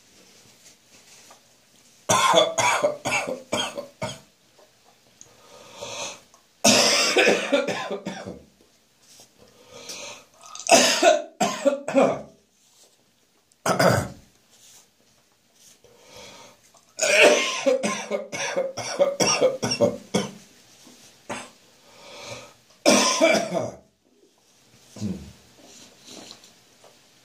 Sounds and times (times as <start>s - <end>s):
Cough: 2.1s - 4.3s, 6.6s - 8.5s, 10.6s - 12.4s, 13.6s - 14.2s, 17.0s - 20.4s, 21.3s - 21.6s, 22.8s - 23.8s.